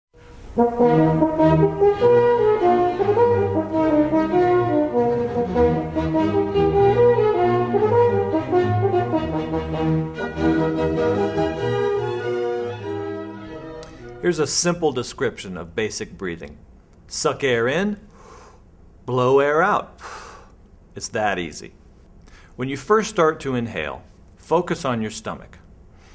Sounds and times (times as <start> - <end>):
Brass instrument: 0.2 - 14.6.